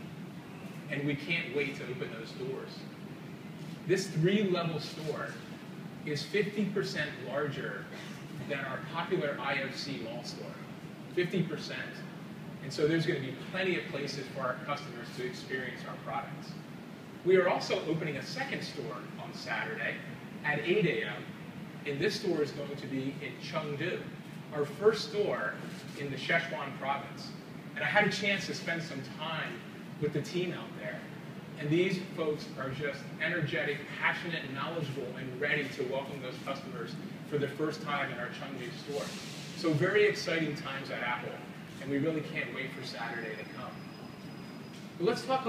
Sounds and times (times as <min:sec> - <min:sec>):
Narration, monologue: 0:00.0 - 0:45.4
Male speech, man speaking: 0:00.9 - 0:02.8, 0:03.9 - 0:05.5, 0:06.1 - 0:16.6, 0:17.3 - 0:43.9, 0:45.0 - 0:45.4.